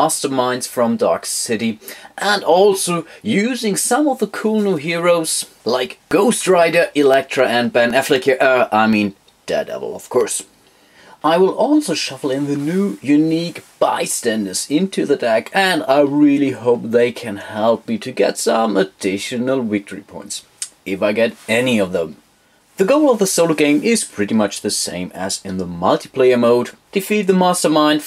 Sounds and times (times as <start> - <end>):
Speech: 0.0 - 10.5, 11.2 - 22.2, 22.8 - 28.0
Inside, small room: 0.0 - 28.0.